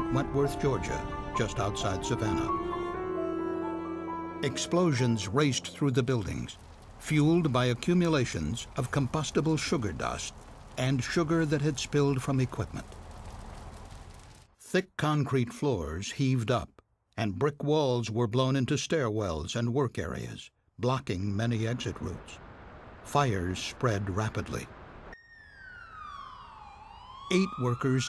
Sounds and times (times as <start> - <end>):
Speech: 0.0 - 2.5, 4.4 - 12.9, 14.6 - 22.4, 23.1 - 24.7, 27.3 - 28.0.